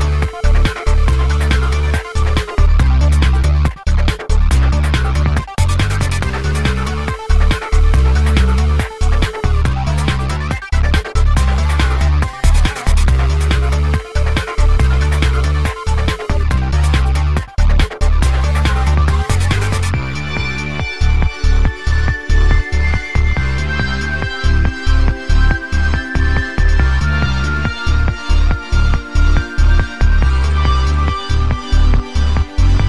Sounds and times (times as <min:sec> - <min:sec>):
Music: 0:00.0 - 0:32.8.